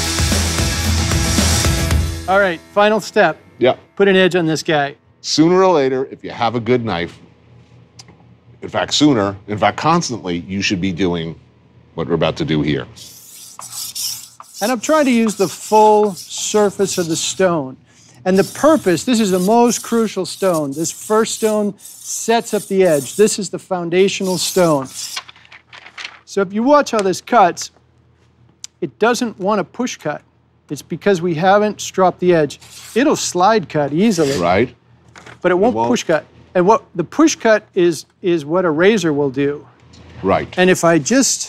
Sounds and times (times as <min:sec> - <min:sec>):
Speech: 0:02.3 - 0:07.2, 0:08.6 - 0:11.4, 0:12.0 - 0:13.0, 0:14.6 - 0:25.0, 0:26.3 - 0:27.8, 0:28.7 - 0:34.8, 0:35.4 - 0:41.4.